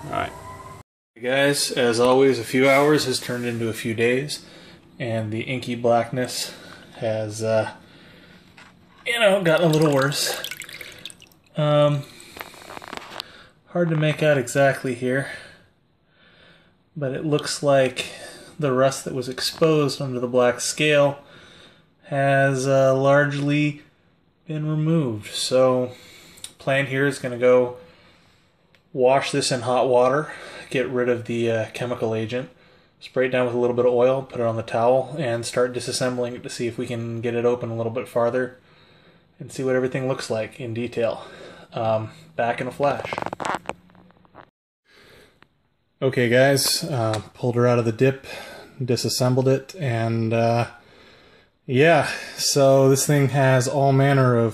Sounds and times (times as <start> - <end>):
Speech: 0.0 - 0.4, 1.2 - 7.8, 9.0 - 10.5, 11.6 - 12.1, 13.7 - 15.6, 17.0 - 21.2, 22.0 - 26.0, 26.6 - 27.8, 28.9 - 38.6, 39.4 - 43.2, 46.0 - 50.8, 51.7 - 54.5
Inside, small room: 0.0 - 54.5.